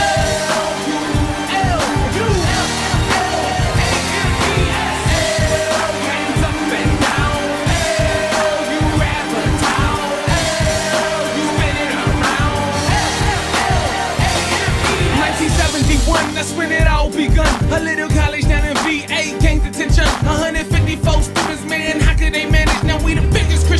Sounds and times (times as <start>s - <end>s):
Pop music: 0.0s - 23.7s
Soundtrack music: 0.0s - 23.7s.